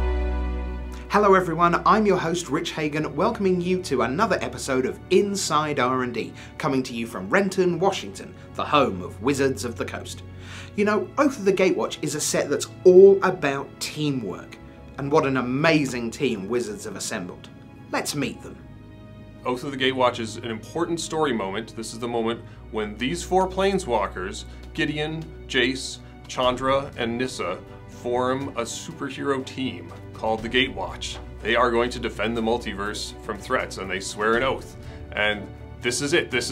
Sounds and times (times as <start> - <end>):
Music: 0.0 - 36.5
Speech: 1.1 - 10.2, 10.8 - 18.6, 19.4 - 36.5.